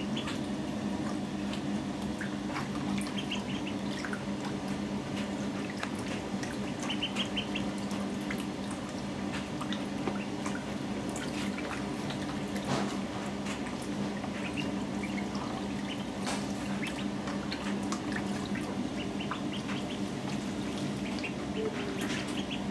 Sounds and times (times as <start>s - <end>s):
Duck: 0.0s - 0.4s, 2.6s - 4.1s, 5.4s - 7.8s, 14.3s - 22.7s.